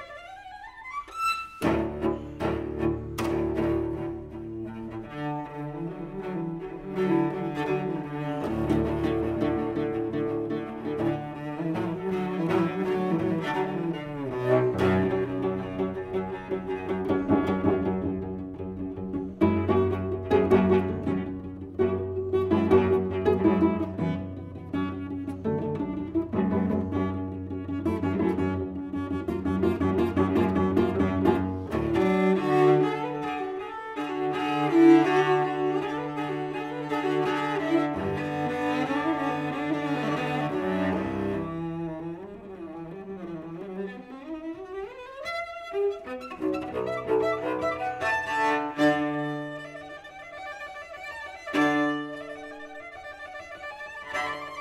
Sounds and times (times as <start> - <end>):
Cello: 0.0 - 54.6.